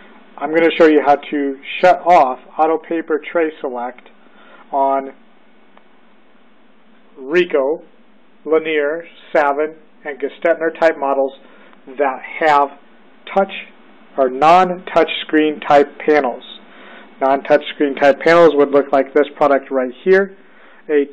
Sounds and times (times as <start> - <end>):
Speech: 0.4 - 4.1, 4.7 - 5.2, 7.2 - 16.6, 17.2 - 21.1.